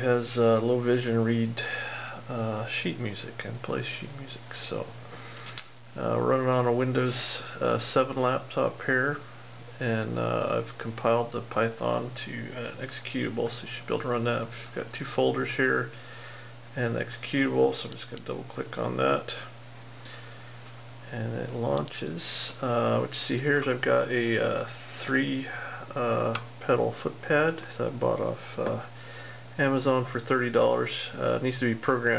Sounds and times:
Speech: 0:00.0 - 0:05.0, 0:06.0 - 0:16.0, 0:16.7 - 0:19.6, 0:21.1 - 0:28.9, 0:29.6 - 0:32.1.

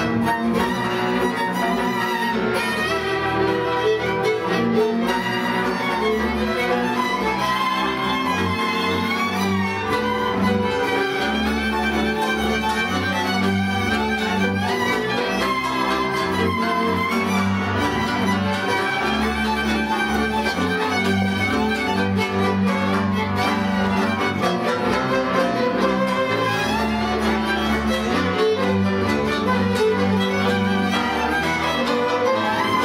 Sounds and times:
Orchestra: 0:00.0 - 0:32.8.

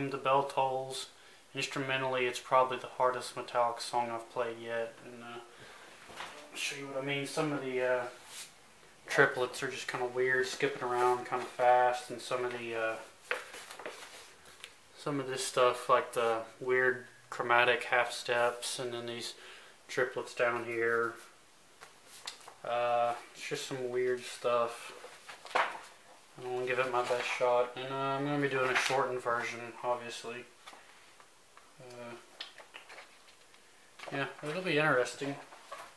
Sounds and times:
Speech: 0:00.0 - 0:05.5, 0:06.4 - 0:08.2, 0:09.1 - 0:13.1, 0:15.0 - 0:21.3, 0:22.6 - 0:25.0, 0:26.4 - 0:30.5, 0:31.8 - 0:32.3, 0:34.0 - 0:35.5.

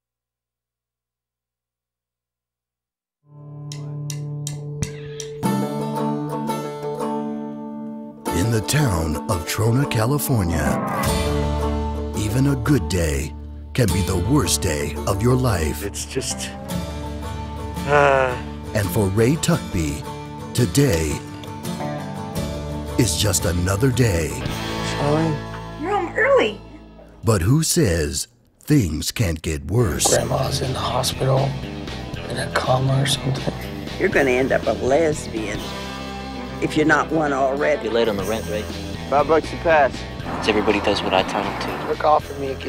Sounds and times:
Music: 0:03.2 - 0:27.9, 0:29.8 - 0:42.6
Speech: 0:08.3 - 0:10.8, 0:12.2 - 0:16.5, 0:17.9 - 0:20.0, 0:23.0 - 0:25.4, 0:27.2 - 0:31.5, 0:36.6 - 0:42.6.

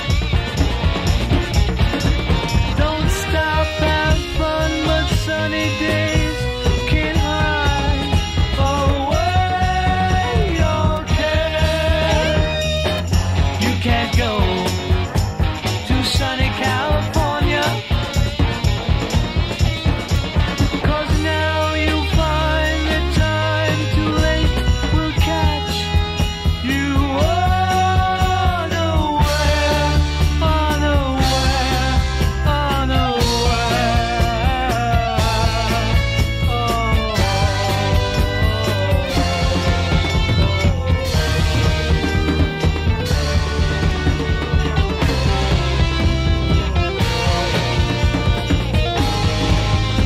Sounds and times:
Psychedelic rock: 0:00.0 - 0:50.0.

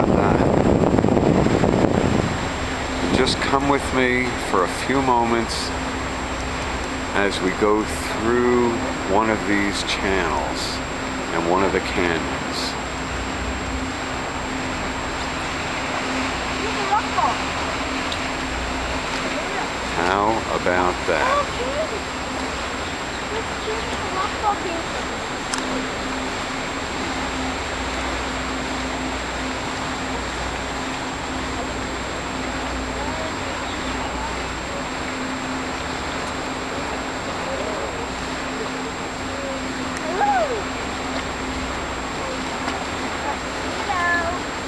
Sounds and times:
Speech: 0:03.0 - 0:05.7, 0:07.2 - 0:12.8, 0:19.9 - 0:21.9.

